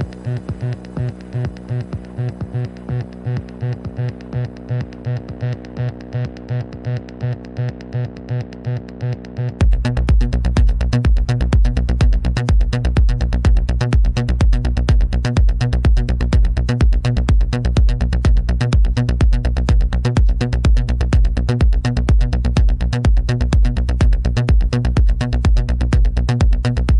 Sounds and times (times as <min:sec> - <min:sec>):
Music: 0:00.0 - 0:26.9.